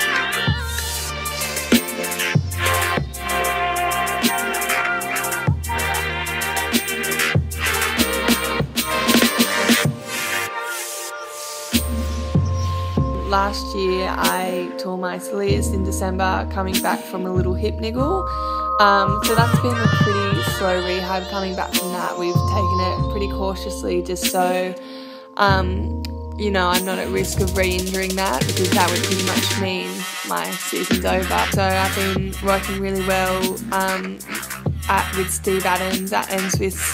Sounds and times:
Music: 0.0s - 36.9s
Speech: 13.2s - 24.8s, 25.4s - 34.3s, 34.9s - 36.9s.

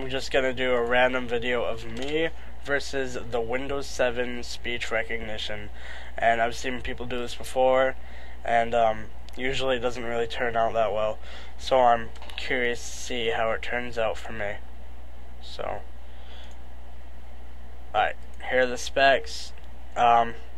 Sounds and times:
Male speech, man speaking: 0.0s - 14.6s, 15.4s - 15.8s, 18.0s - 20.5s
Narration, monologue: 0.0s - 20.5s.

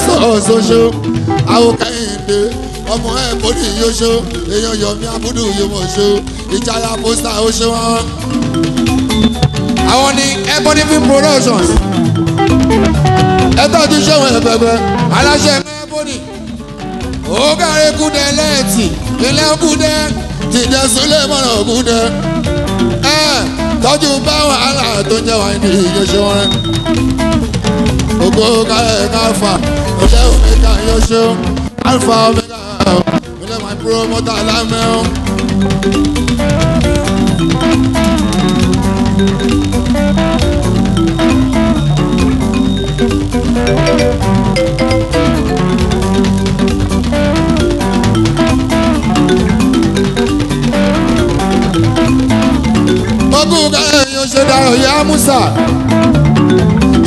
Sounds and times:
Music of Africa: 0.0s - 57.0s.

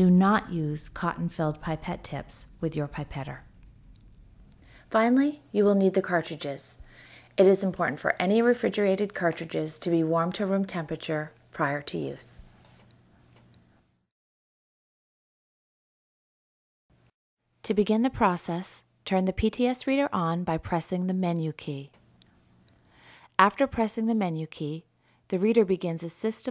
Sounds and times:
Speech: 0.0s - 3.5s, 4.9s - 6.8s, 7.4s - 12.4s, 17.7s - 22.0s, 23.4s - 26.5s.

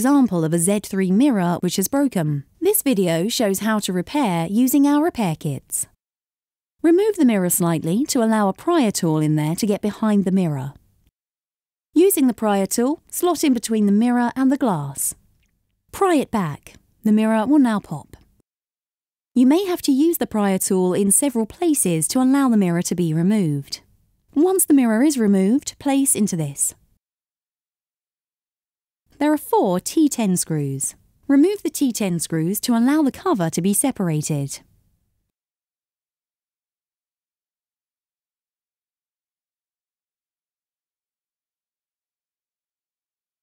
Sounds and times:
Speech: 0.0s - 6.0s, 6.8s - 10.8s, 12.0s - 15.2s, 16.0s - 18.2s, 19.4s - 26.8s, 29.2s - 34.7s.

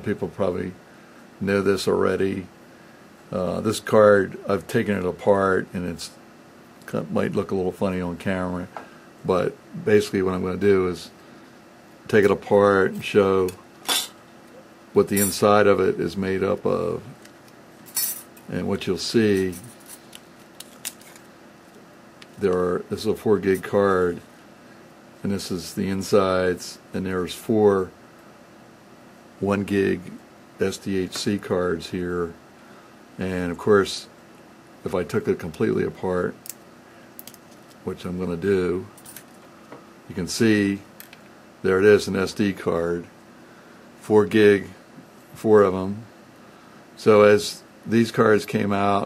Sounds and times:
Speech: 0.0s - 0.8s, 1.4s - 2.5s, 3.3s - 6.2s, 6.8s - 11.2s, 12.1s - 13.6s, 15.0s - 17.2s, 18.5s - 19.7s, 22.4s - 24.3s, 25.2s - 28.0s, 29.4s - 32.4s, 33.2s - 34.2s, 34.8s - 36.4s, 37.8s - 39.0s, 40.1s - 40.9s, 41.6s - 43.2s, 44.0s - 44.8s, 45.4s - 46.1s, 47.0s - 49.0s.

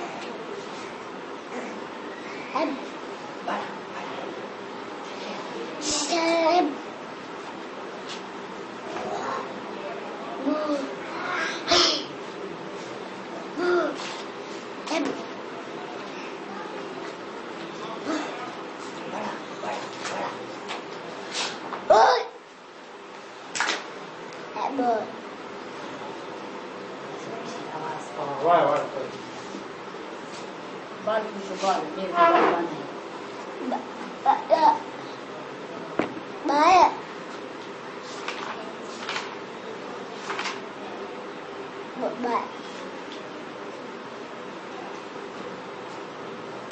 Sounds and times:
Child speech, kid speaking: 2.5s - 4.2s, 5.8s - 6.8s, 8.9s - 9.6s, 10.4s - 12.1s, 14.9s - 15.3s, 16.1s - 16.9s, 21.9s - 22.4s, 24.5s - 25.2s, 33.6s - 34.9s, 36.4s - 37.0s, 42.0s - 42.8s.

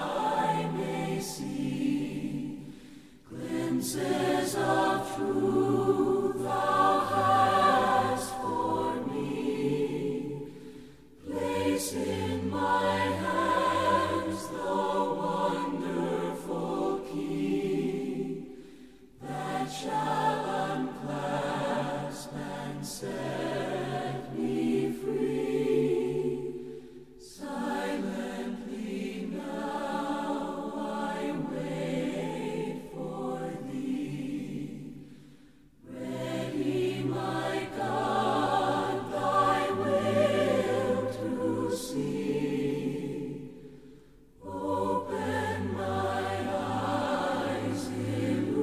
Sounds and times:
A capella: 0.0s - 48.6s.

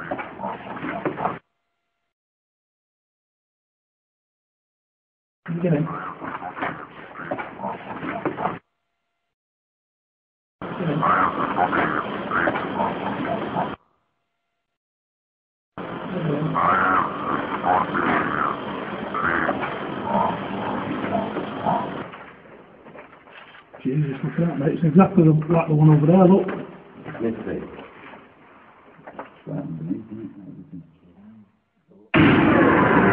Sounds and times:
Speech: 5.5s - 6.2s, 16.1s - 16.8s, 23.8s - 27.8s, 29.5s - 32.2s
Oink: 5.6s - 7.8s, 10.8s - 12.9s, 16.2s - 18.6s, 19.2s - 20.4s.

